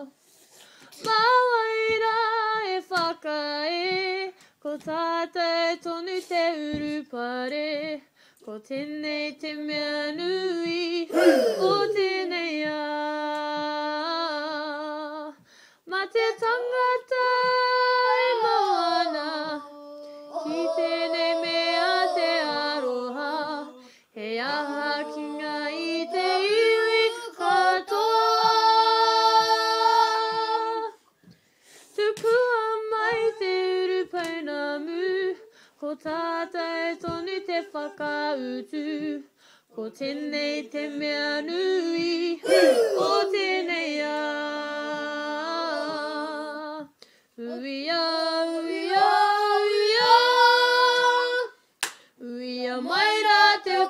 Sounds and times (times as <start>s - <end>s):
Child singing: 1.0s - 8.0s, 8.6s - 31.0s, 32.0s - 51.6s, 52.2s - 53.8s
Female singing: 1.0s - 31.0s, 32.0s - 51.6s, 52.2s - 53.8s.